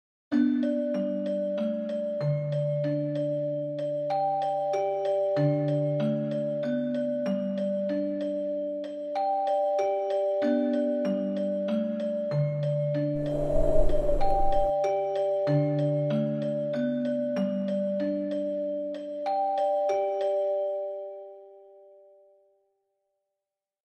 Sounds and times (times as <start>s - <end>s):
Music: 0.3s - 23.2s.